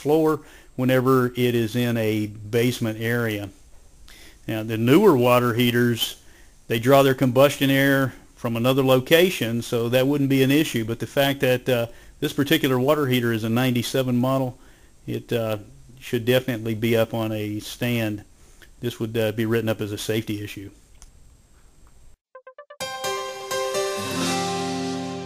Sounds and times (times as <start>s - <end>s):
Speech: 0.0s - 3.6s, 4.5s - 20.8s.